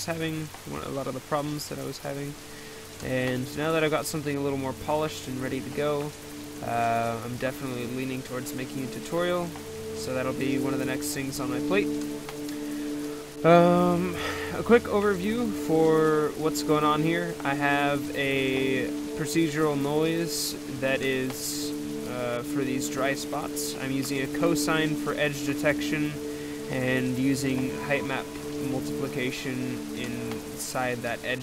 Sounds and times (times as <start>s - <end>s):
Speech: 0.0s - 2.4s, 3.0s - 11.9s, 13.4s - 31.4s
Music: 2.0s - 31.4s.